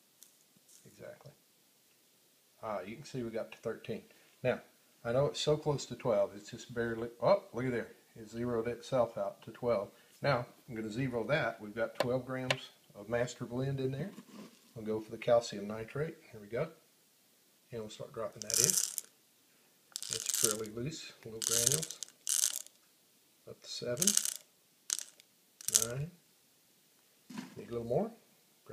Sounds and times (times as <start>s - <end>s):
Inside, small room: 0.0s - 28.7s
Speech: 0.8s - 1.4s, 2.6s - 14.2s, 14.8s - 16.8s, 17.7s - 18.8s, 20.1s - 22.0s, 23.5s - 24.2s, 25.7s - 26.2s, 27.6s - 28.7s.